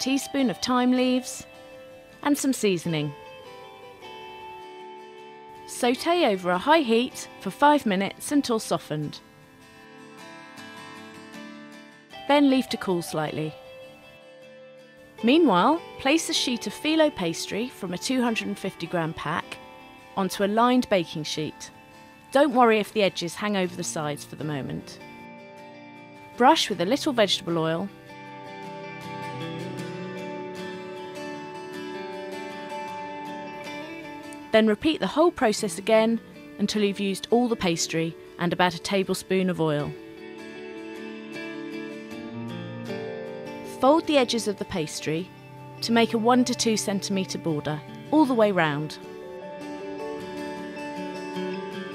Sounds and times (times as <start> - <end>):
Speech: 0.0 - 1.5, 2.2 - 3.2, 5.7 - 9.2, 12.3 - 13.6, 15.2 - 19.6, 20.2 - 21.7, 22.4 - 25.0, 26.4 - 27.9, 34.5 - 40.0, 43.7 - 49.0
Music: 0.0 - 51.9.